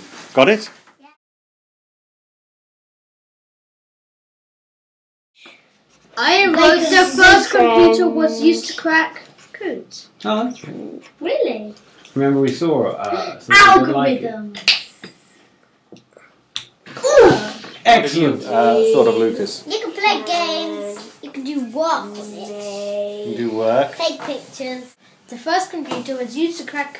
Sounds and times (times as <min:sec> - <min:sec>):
Inside, small room: 0:05.4 - 0:26.9
Speech: 0:17.4 - 0:21.0.